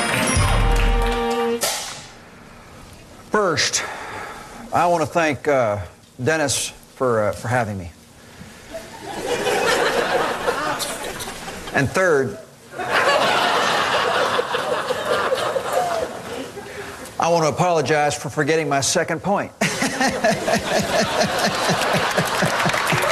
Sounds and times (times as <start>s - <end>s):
Narration, monologue: 1.9s - 8.6s, 10.8s - 12.7s, 16.6s - 22.6s
Male speech, man speaking: 3.3s - 3.8s, 4.7s - 8.0s, 11.8s - 12.5s, 17.2s - 19.6s.